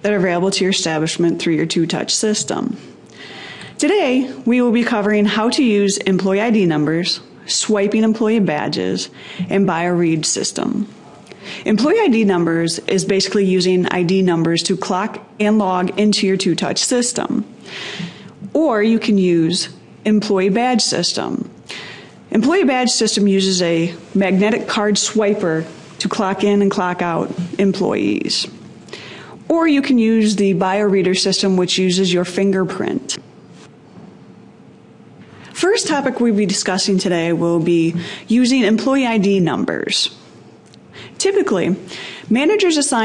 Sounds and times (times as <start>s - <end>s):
Speech: 0.0s - 2.8s, 3.8s - 17.5s, 18.4s - 21.5s, 22.3s - 28.6s, 29.5s - 33.2s, 35.6s - 40.2s, 41.2s - 43.0s.